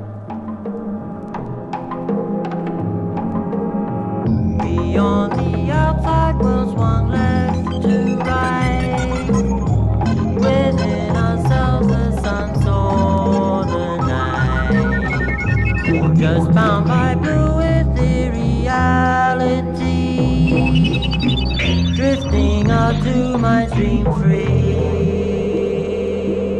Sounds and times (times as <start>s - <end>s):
Music: 0.0s - 26.5s.